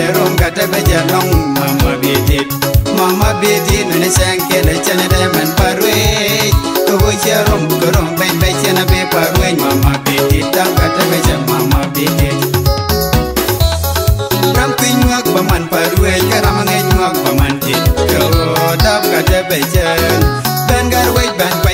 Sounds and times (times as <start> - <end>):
Funk: 0.0 - 21.7.